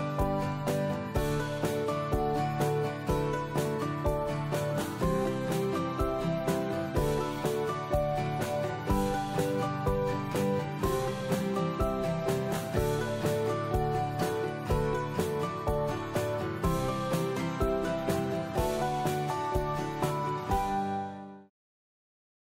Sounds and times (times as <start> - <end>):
Music: 0.0 - 21.5.